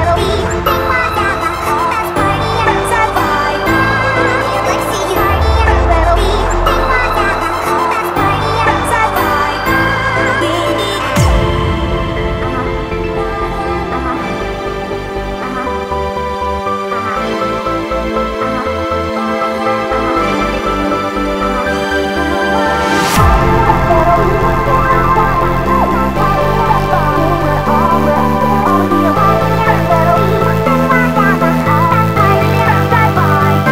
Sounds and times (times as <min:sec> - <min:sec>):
Music: 0:00.0 - 0:33.7.